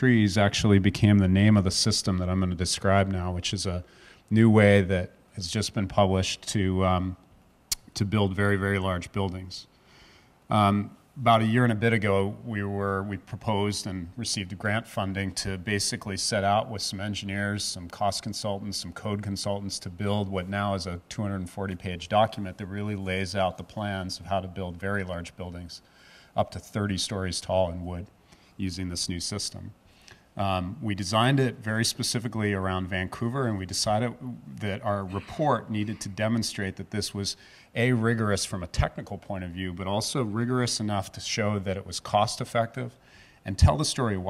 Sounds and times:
Speech: 0.0s - 9.7s, 10.5s - 25.8s, 26.4s - 29.8s, 30.4s - 44.3s.

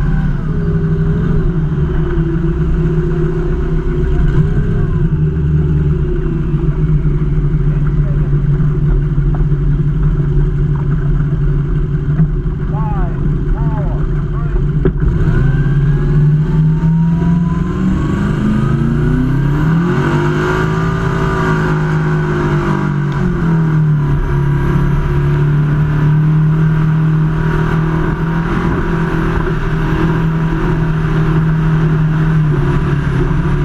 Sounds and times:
Motorboat, speedboat: 0.0s - 33.6s.

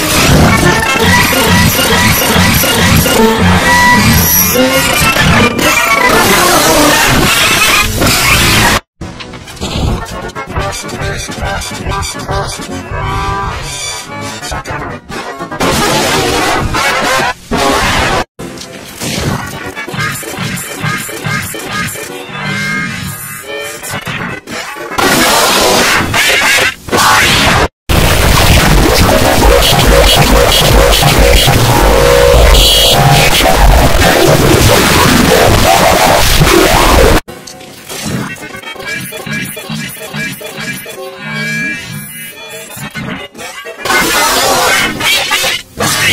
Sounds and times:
Music: 0.0s - 26.7s, 28.0s - 46.1s.

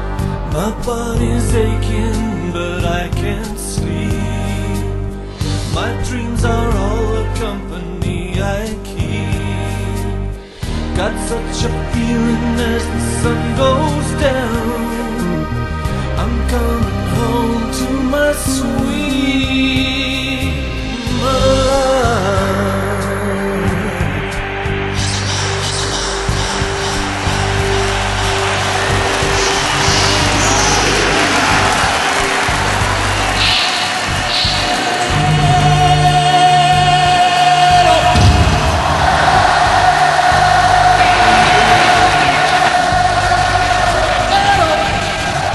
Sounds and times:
Music: 0.0s - 45.5s.

